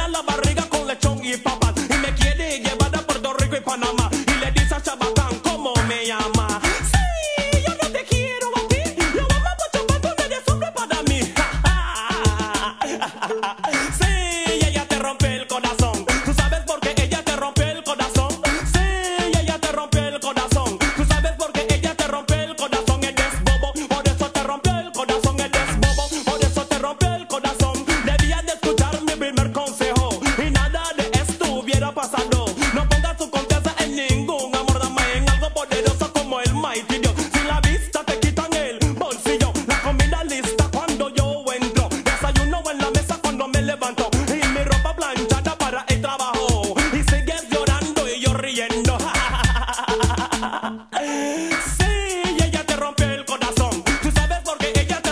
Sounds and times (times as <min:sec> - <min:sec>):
Afrobeat: 0:00.0 - 0:55.1.